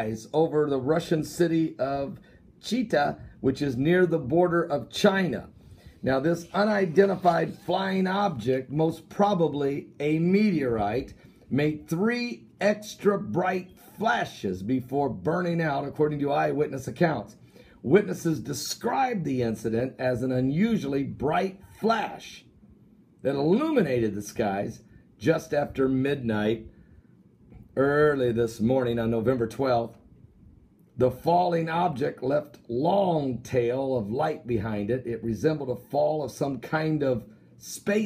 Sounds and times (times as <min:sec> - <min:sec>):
Speech: 0:00.0 - 0:22.5, 0:23.2 - 0:26.7, 0:27.8 - 0:30.0, 0:31.0 - 0:38.0.